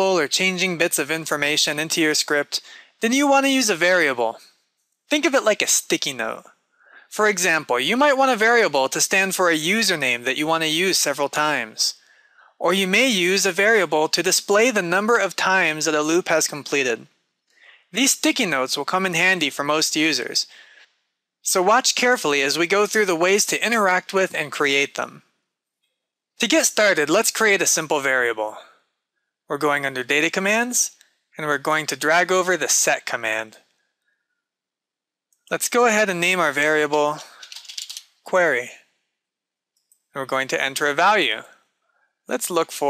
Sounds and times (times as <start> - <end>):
Speech: 0.0 - 4.5, 5.1 - 20.8, 21.4 - 25.2, 26.4 - 28.8, 29.5 - 33.6, 35.5 - 37.6, 38.3 - 38.8, 40.2 - 41.6, 42.3 - 42.8.